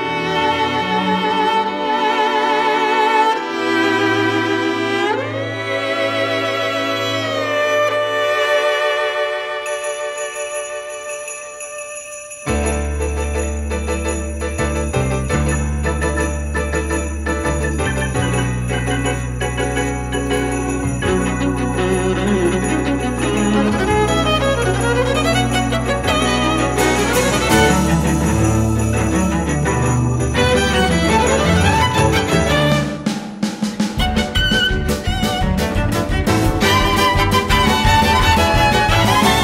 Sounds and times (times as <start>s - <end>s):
Cello: 0.0s - 9.9s, 20.8s - 33.0s, 34.0s - 39.4s
Violin, fiddle: 0.0s - 11.0s, 19.6s - 33.0s, 34.0s - 39.4s.